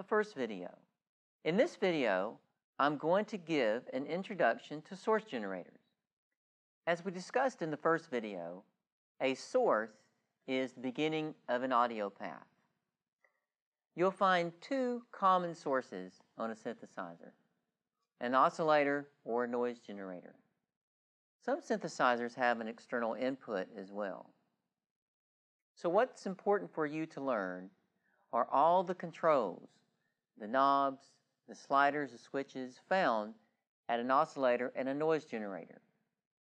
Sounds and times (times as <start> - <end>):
Speech: 0.0 - 0.8, 1.5 - 5.8, 6.9 - 12.5, 14.0 - 17.4, 18.2 - 20.4, 21.4 - 24.4, 25.8 - 27.7, 28.4 - 29.8, 30.4 - 35.8.